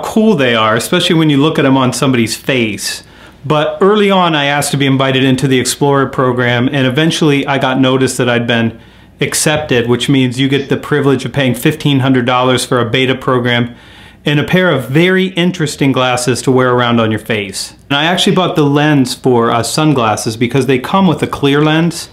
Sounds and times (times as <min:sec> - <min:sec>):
Speech: 0:00.0 - 0:22.1.